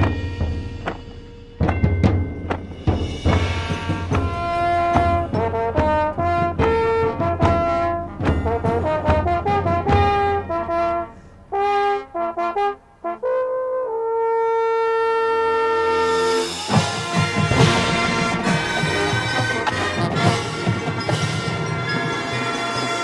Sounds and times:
Trombone: 0:03.0 - 0:23.0
Trumpet: 0:03.1 - 0:23.0
French horn: 0:03.3 - 0:23.0.

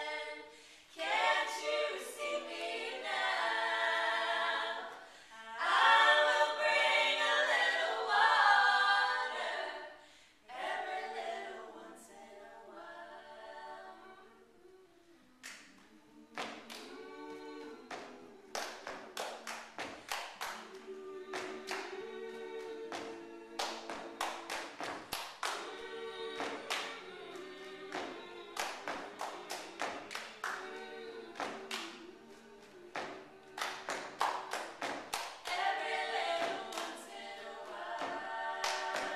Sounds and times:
Singing: 0:00.0 - 0:39.1.

